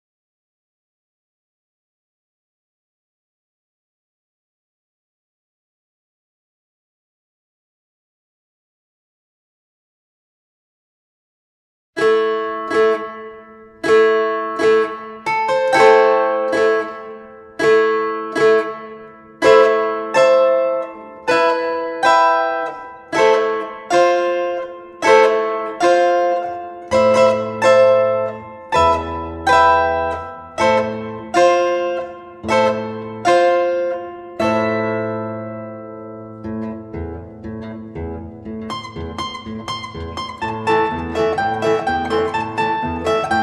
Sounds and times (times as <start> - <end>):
Musical instrument: 13.8 - 43.4.